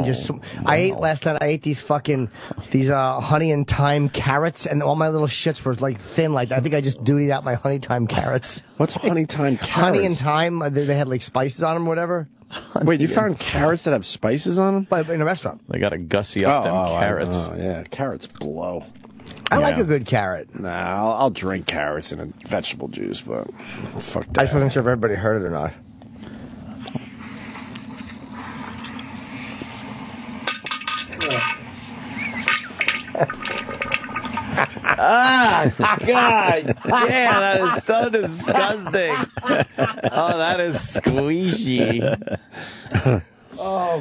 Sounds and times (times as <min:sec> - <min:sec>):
Speech: 0:00.0 - 0:18.9, 0:19.5 - 0:25.8, 0:35.0 - 0:39.4, 0:40.0 - 0:42.3, 0:43.6 - 0:44.0
Fill (with liquid): 0:32.5 - 0:34.7.